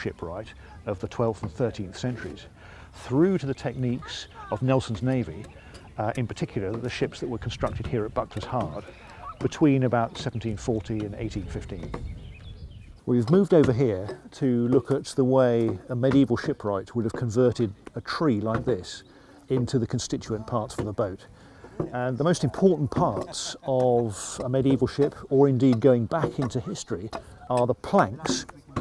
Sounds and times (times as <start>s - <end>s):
Speech: 0.0s - 12.0s, 13.1s - 21.3s, 21.9s - 28.8s.